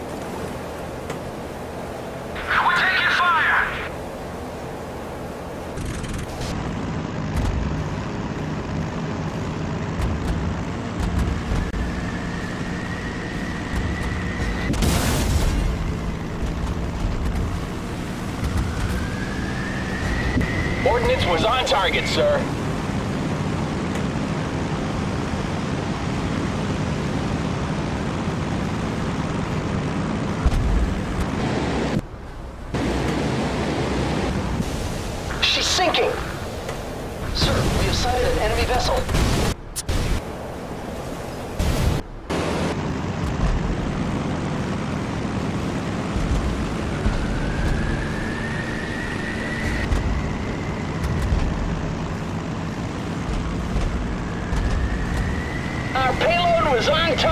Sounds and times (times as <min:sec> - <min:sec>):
Speech: 0:02.4 - 0:03.9, 0:20.8 - 0:22.5, 0:35.4 - 0:36.4, 0:37.3 - 0:39.1, 0:56.0 - 0:57.3.